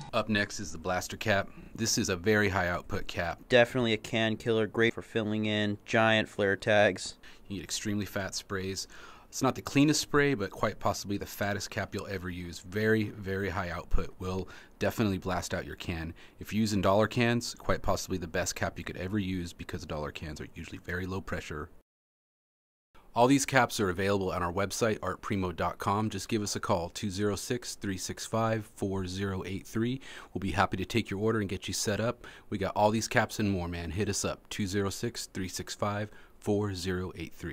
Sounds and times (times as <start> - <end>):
Speech: 0.0 - 21.8, 23.1 - 37.5.